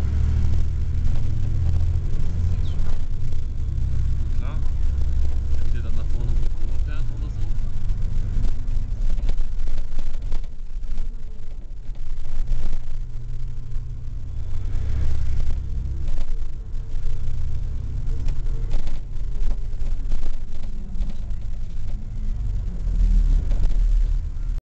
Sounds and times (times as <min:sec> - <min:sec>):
Vehicle: 0:00.0 - 0:24.6.